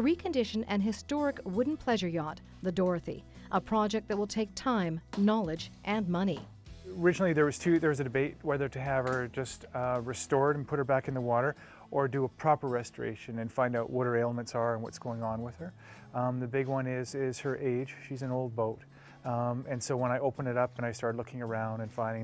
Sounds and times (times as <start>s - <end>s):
Speech: 0.0s - 22.2s.